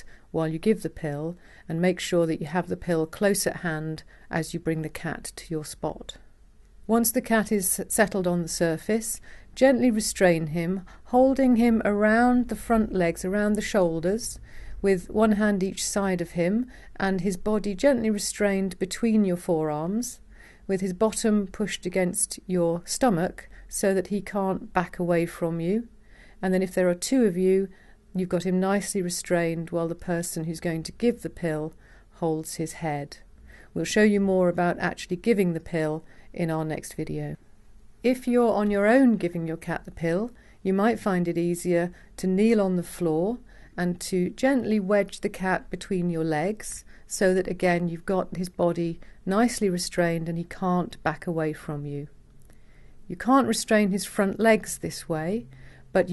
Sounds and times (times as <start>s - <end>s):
Speech: 0.0s - 6.2s, 6.9s - 33.2s, 33.8s - 37.4s, 38.1s - 52.1s, 53.1s - 56.1s.